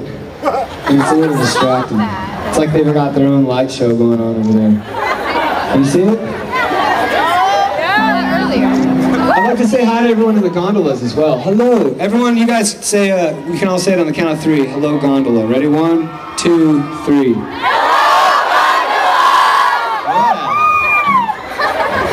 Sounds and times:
Music: 8.0s - 9.6s.

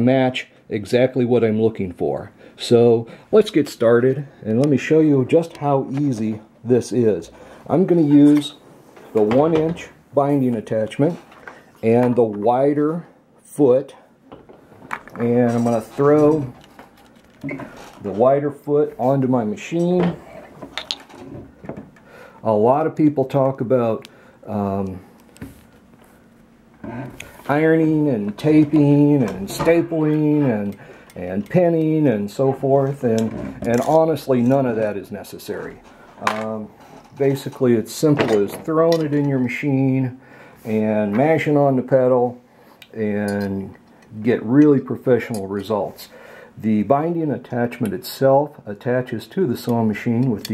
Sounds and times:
Speech: 0.0s - 11.2s, 11.8s - 14.1s, 15.2s - 16.6s, 18.0s - 20.2s, 22.4s - 25.1s, 27.4s - 50.5s.

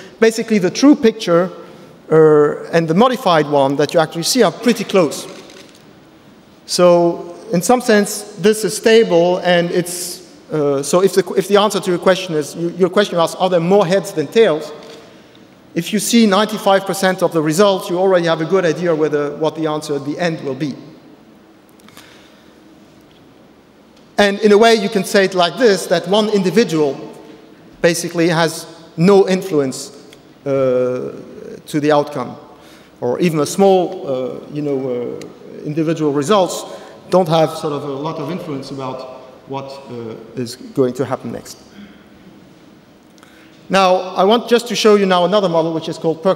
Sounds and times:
Speech: 0.0s - 5.4s, 6.7s - 14.8s, 15.8s - 21.0s, 24.2s - 27.2s, 27.8s - 32.4s, 33.0s - 41.7s, 43.7s - 46.3s.

